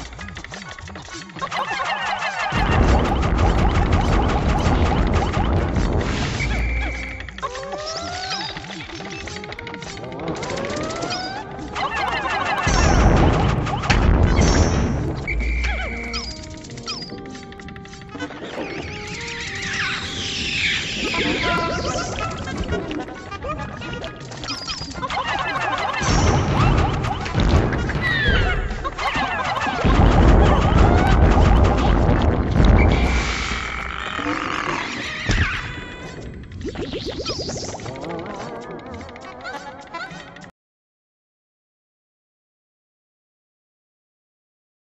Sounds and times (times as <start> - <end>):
Music: 0.0 - 40.5.